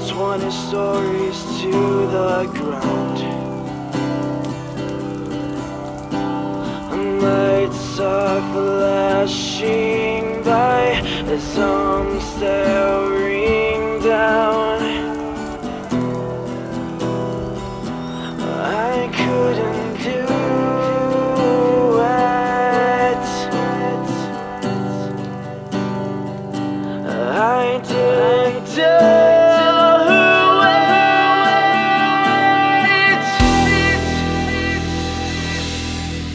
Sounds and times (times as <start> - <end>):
Rain on surface: 0.0 - 36.3.